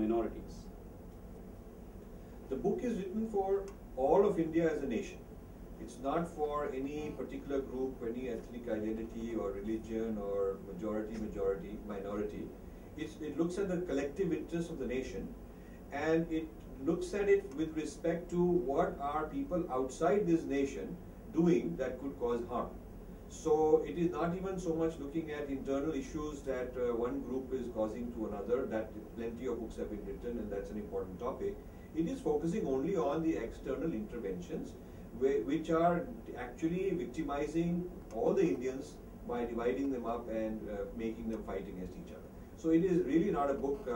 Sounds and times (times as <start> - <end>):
Speech: 0.0 - 0.7, 2.5 - 5.2, 5.8 - 43.9.